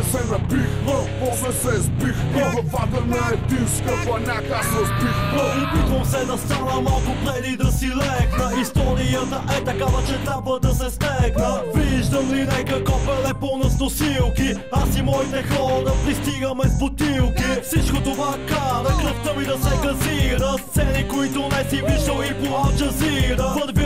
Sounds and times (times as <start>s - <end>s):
Music: 0.0s - 23.8s.